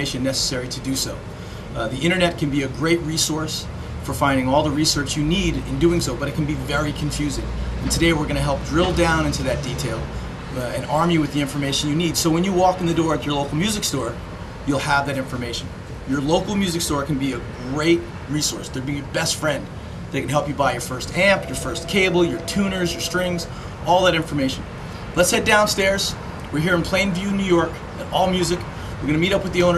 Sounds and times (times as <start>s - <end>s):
Speech: 0.0s - 29.7s.